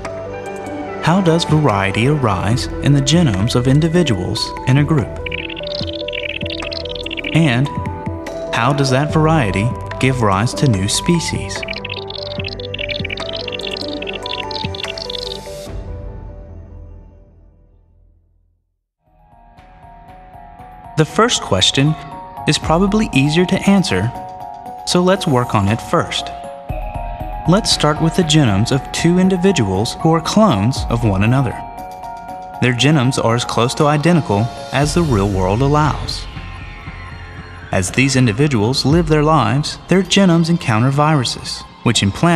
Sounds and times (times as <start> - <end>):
Music: 0.0 - 42.3
Speech: 1.0 - 5.2, 7.3 - 7.9, 8.5 - 11.8, 21.0 - 24.2, 24.9 - 26.4, 27.5 - 31.7, 32.6 - 36.3, 37.7 - 42.3.